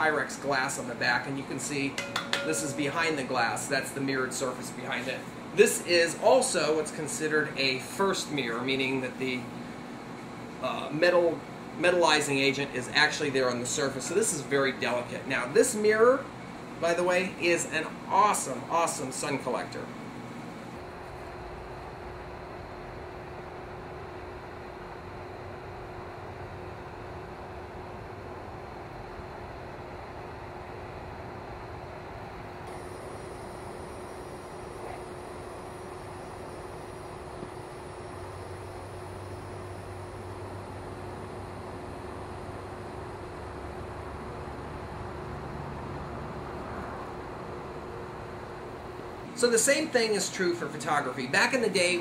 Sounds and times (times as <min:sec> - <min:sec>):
Speech: 0:00.0 - 0:09.5, 0:10.6 - 0:19.9, 0:49.4 - 0:52.0.